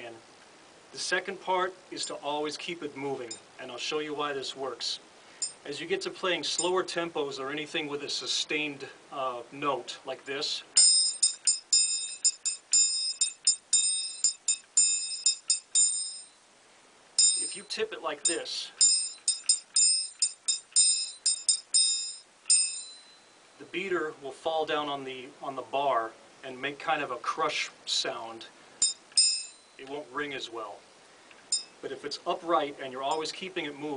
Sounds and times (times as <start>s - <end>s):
Speech: 0.0s - 0.2s, 0.9s - 5.0s, 5.7s - 10.8s, 17.4s - 18.8s, 23.6s - 28.5s, 29.8s - 30.8s, 31.8s - 33.9s
Percussion: 5.4s - 5.7s, 10.8s - 16.4s, 17.2s - 23.4s, 28.8s - 30.0s, 31.4s - 31.9s.